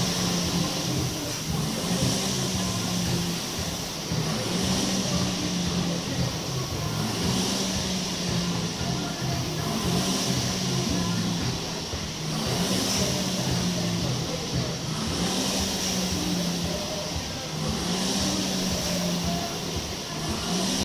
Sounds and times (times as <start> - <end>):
Music: 0.0 - 20.8.